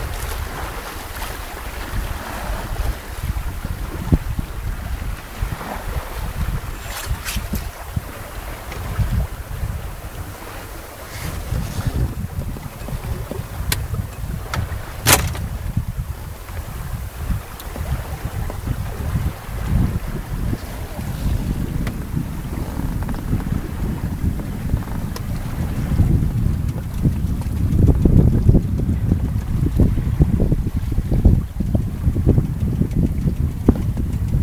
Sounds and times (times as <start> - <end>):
Ocean: 0.0 - 34.4
Sailboat, sailing ship: 0.0 - 34.4
Wind noise (microphone): 0.0 - 34.4.